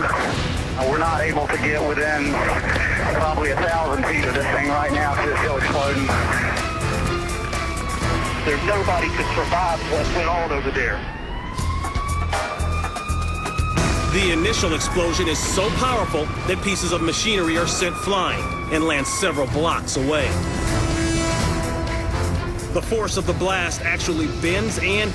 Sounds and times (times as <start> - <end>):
Music: 0.0 - 25.1.